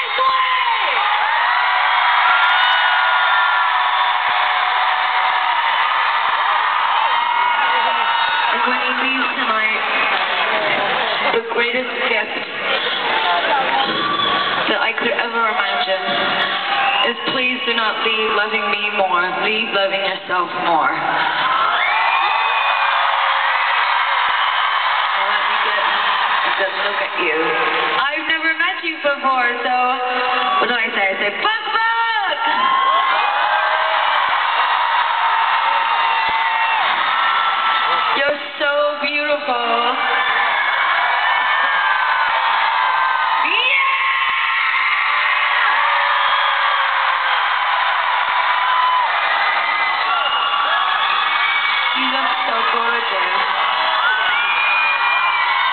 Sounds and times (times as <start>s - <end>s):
Female speech, woman speaking: 8.5s - 9.9s, 11.3s - 12.5s, 14.7s - 16.4s, 17.0s - 21.2s, 26.5s - 32.6s, 38.2s - 40.0s, 43.4s - 44.0s, 52.0s - 53.4s.